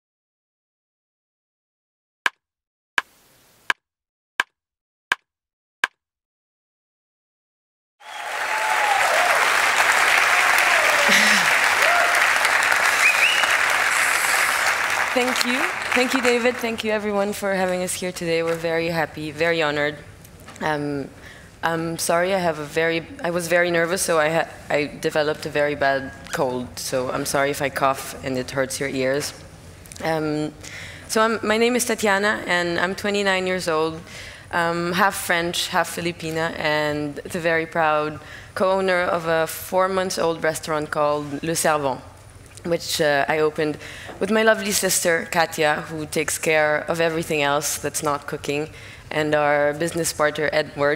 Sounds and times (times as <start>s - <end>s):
Applause: 8.0s - 16.9s.